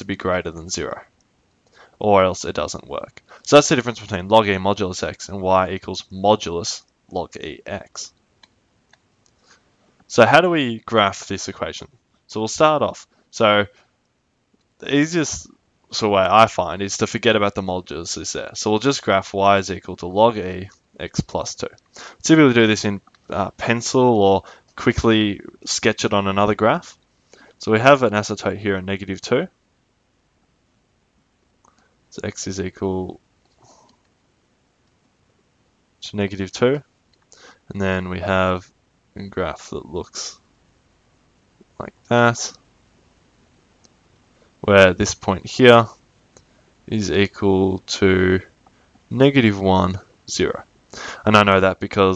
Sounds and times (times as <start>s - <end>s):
Speech: 0.0s - 1.2s, 2.0s - 8.2s, 10.1s - 13.8s, 14.8s - 27.0s, 27.6s - 29.6s, 32.2s - 33.2s, 36.0s - 36.9s, 37.7s - 40.4s, 41.8s - 42.6s, 44.6s - 46.0s, 46.9s - 52.1s.